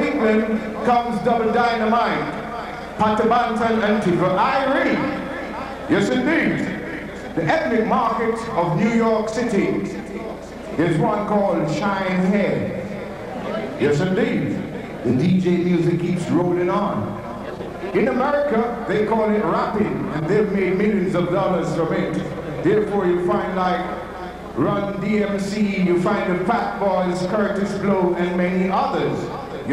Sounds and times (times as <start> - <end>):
Speech: 0.0 - 29.7.